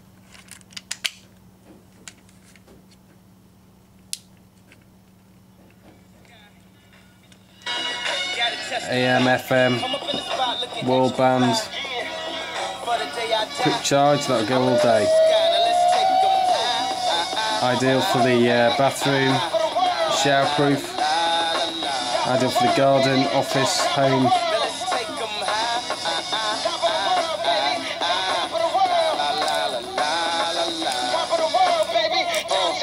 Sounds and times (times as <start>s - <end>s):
Music: 6.4s - 32.8s
Radio: 13.6s - 16.4s
Speech: 22.3s - 24.3s.